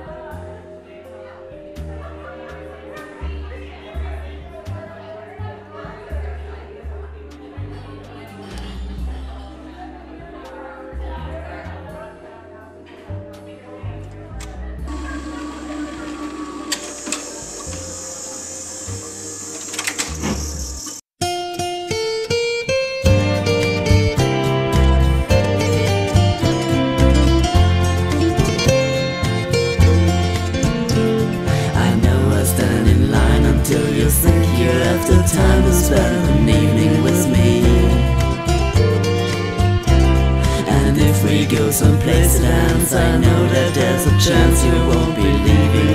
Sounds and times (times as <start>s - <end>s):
Music: 0.0s - 45.9s.